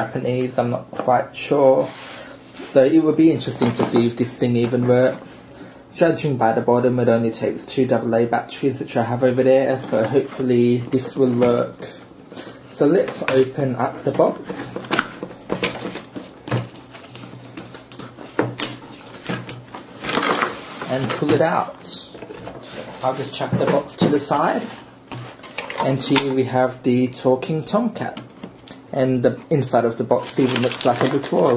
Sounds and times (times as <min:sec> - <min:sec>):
Speech: 0:00.0 - 0:02.0, 0:02.7 - 0:12.0, 0:12.7 - 0:14.8, 0:20.9 - 0:22.2, 0:23.0 - 0:24.8, 0:25.8 - 0:28.3, 0:28.9 - 0:31.5.